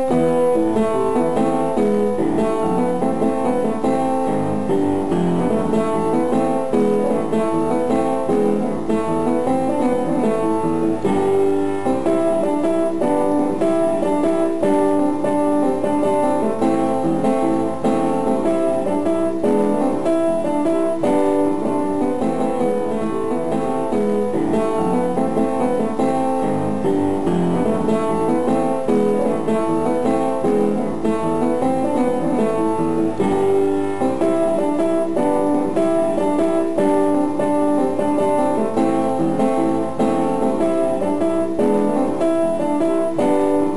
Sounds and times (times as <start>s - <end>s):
Music: 0.0s - 43.7s.